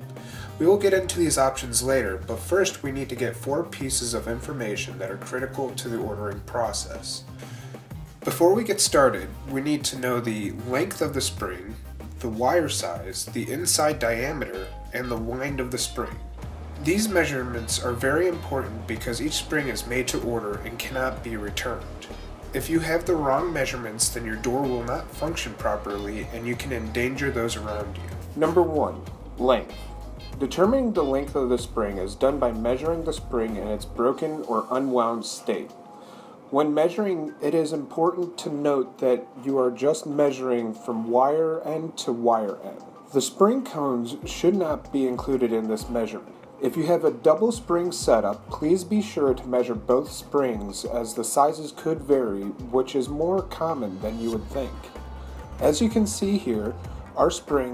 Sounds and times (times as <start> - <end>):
Music: 0.0 - 57.7
Speech: 0.6 - 7.3, 8.3 - 16.2, 16.8 - 29.8, 30.4 - 35.8, 36.5 - 54.9, 55.6 - 57.7.